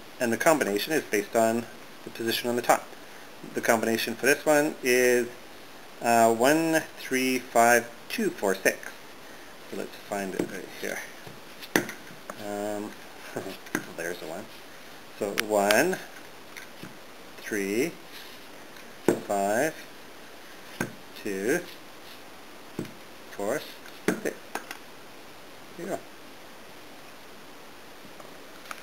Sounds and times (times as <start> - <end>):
Inside, small room: 0.0 - 28.8
Speech: 0.2 - 2.9, 3.5 - 5.4, 6.0 - 9.0, 9.7 - 11.1, 12.4 - 14.5, 15.2 - 16.1, 17.4 - 18.0, 19.2 - 19.8, 21.2 - 21.8, 23.3 - 24.4, 25.8 - 26.1.